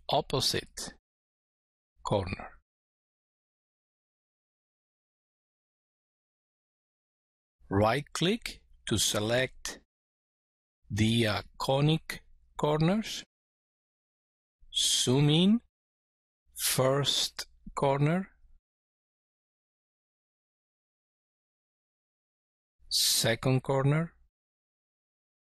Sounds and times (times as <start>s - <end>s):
Speech: 0.0s - 1.0s, 2.0s - 2.6s, 7.7s - 9.9s, 10.9s - 13.3s, 14.7s - 15.7s, 16.6s - 18.4s, 22.9s - 24.3s.